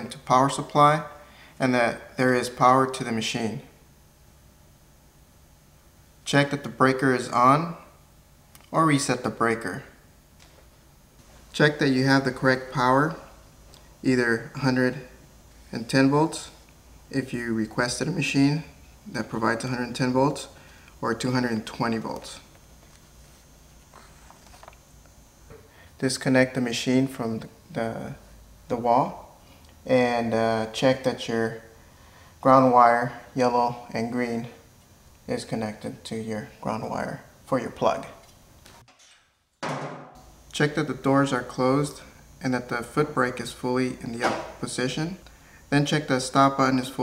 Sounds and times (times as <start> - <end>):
Speech: 0.0 - 3.8, 6.2 - 8.0, 8.6 - 10.0, 11.6 - 13.3, 14.0 - 22.5, 26.0 - 31.7, 32.4 - 34.6, 35.3 - 38.2, 40.5 - 47.0.